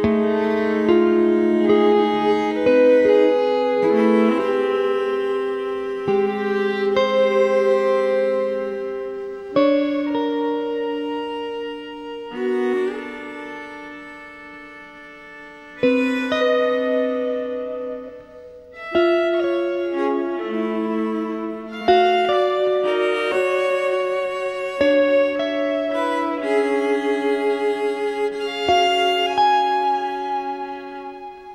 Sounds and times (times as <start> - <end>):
Classical music: 0.0 - 31.5
Violin, fiddle: 0.0 - 31.5.